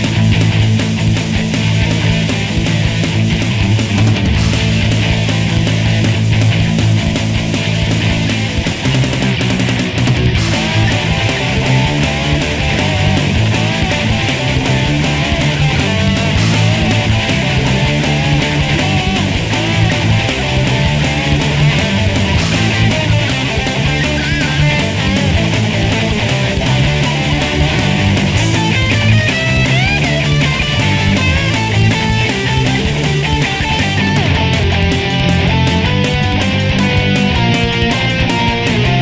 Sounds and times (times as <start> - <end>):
Music: 0.0 - 39.0.